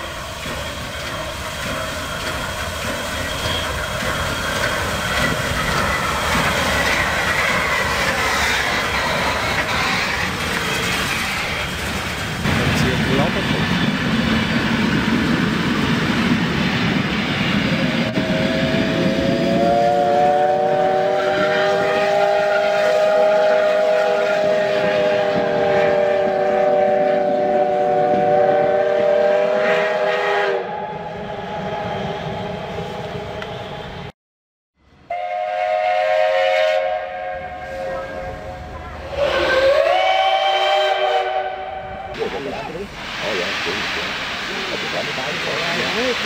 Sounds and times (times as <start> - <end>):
Railroad car, train wagon: 0.0 - 34.1, 34.8 - 46.2
Train whistle: 18.1 - 34.1, 35.1 - 42.2.